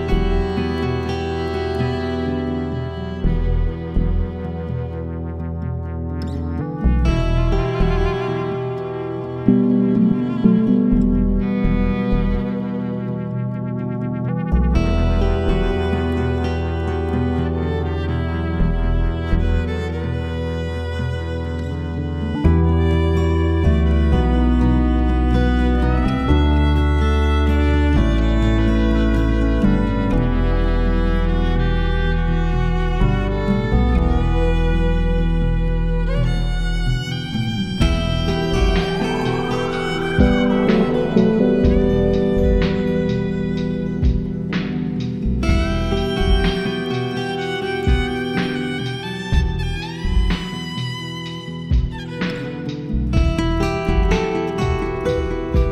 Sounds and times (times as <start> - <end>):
Steel guitar, slide guitar: 0.0 - 55.7.